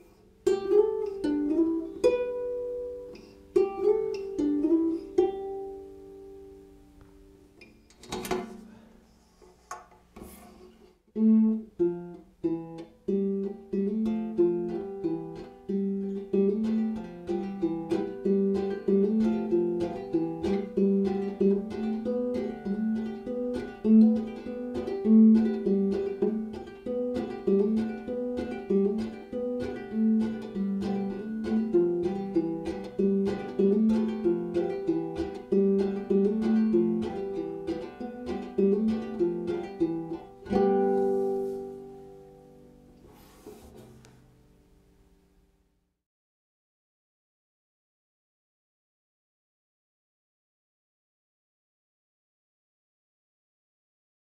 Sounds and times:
Ukulele: 0:00.0 - 0:45.3.

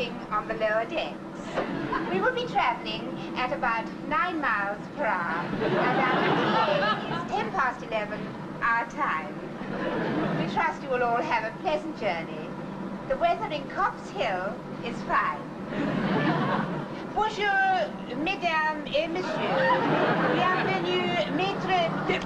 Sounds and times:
Speech: 0:00.0 - 0:01.2, 0:02.1 - 0:09.4, 0:10.4 - 0:12.5, 0:13.1 - 0:15.5, 0:17.1 - 0:22.2.

